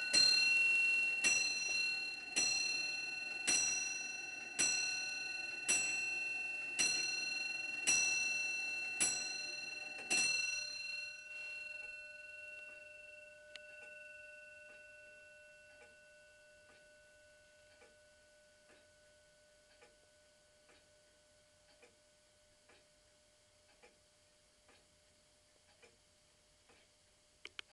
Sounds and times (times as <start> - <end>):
Tick: 19.7 - 20.0, 20.7 - 20.9, 23.7 - 24.0.